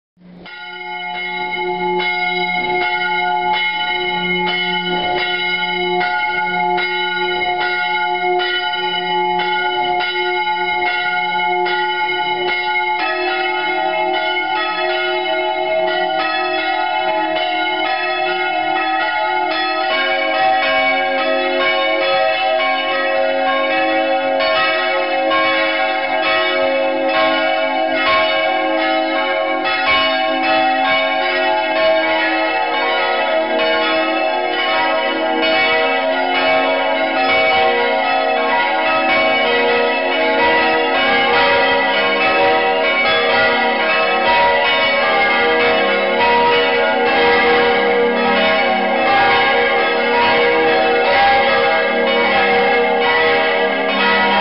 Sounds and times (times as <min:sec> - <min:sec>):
Church bell: 0:00.2 - 0:54.4.